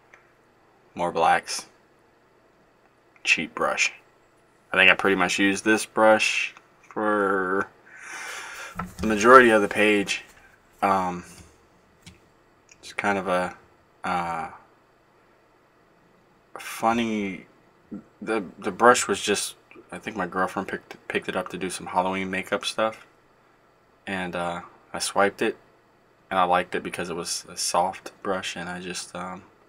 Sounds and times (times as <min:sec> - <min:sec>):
Speech: 0:01.0 - 0:01.8, 0:03.2 - 0:04.0, 0:04.7 - 0:07.7, 0:09.0 - 0:11.4, 0:12.8 - 0:14.6, 0:16.6 - 0:23.1, 0:24.1 - 0:25.6, 0:26.3 - 0:29.5.